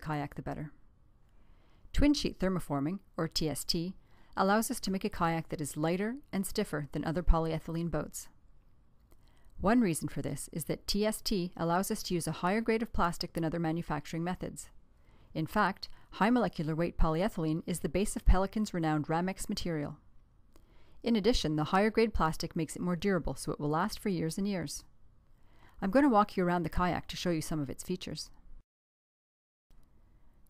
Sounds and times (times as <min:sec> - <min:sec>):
Speech: 0:00.0 - 0:00.8, 0:02.0 - 0:08.4, 0:09.6 - 0:14.8, 0:15.4 - 0:20.0, 0:21.0 - 0:24.9, 0:25.8 - 0:28.4.